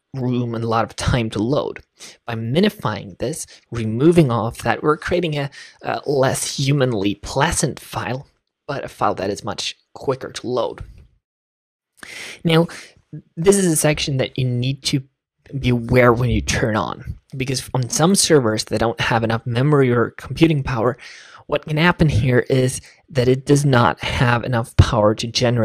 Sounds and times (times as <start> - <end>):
Narration, monologue: 0.0 - 11.2, 12.0 - 25.6.